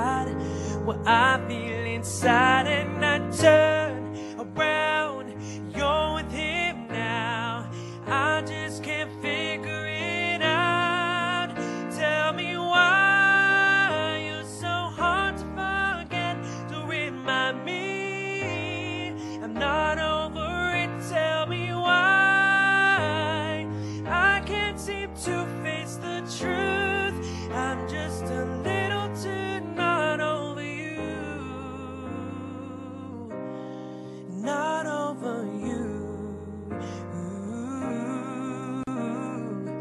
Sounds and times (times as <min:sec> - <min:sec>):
Music: 0:00.0 - 0:39.8.